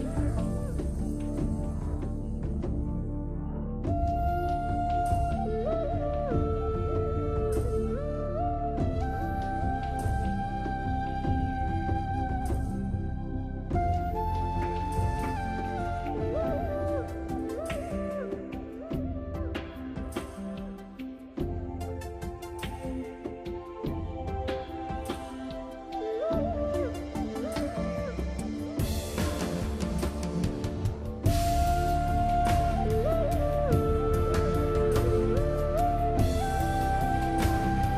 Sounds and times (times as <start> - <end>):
Music: 0.0 - 37.9.